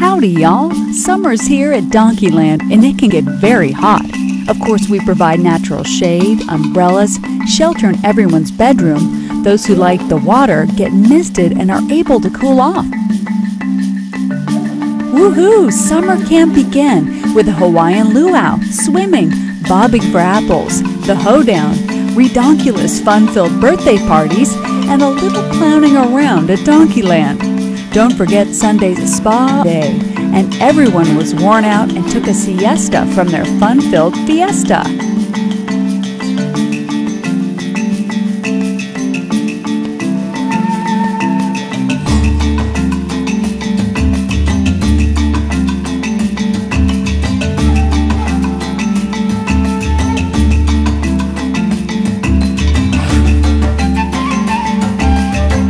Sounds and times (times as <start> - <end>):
Speech: 0.0 - 12.9, 15.1 - 27.4, 28.0 - 34.9
Music: 0.0 - 55.6.